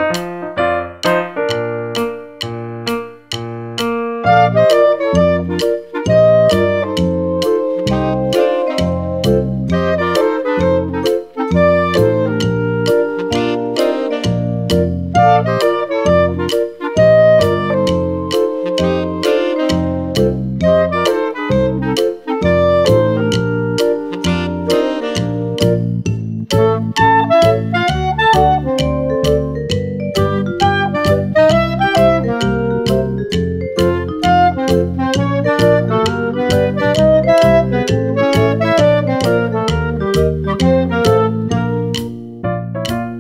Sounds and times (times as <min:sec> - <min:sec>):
Music: 0:00.0 - 0:43.2.